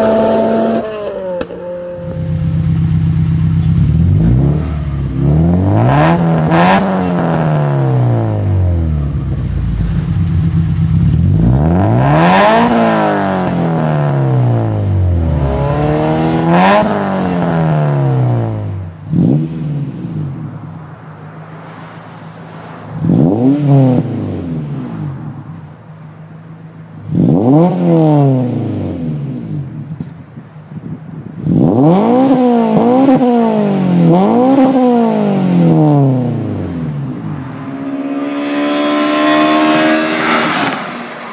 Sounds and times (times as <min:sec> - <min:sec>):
Accelerating, revving, vroom: 0:00.0 - 0:01.5, 0:03.8 - 0:08.8, 0:11.2 - 0:20.2, 0:22.9 - 0:24.8, 0:27.1 - 0:29.2, 0:31.5 - 0:41.3.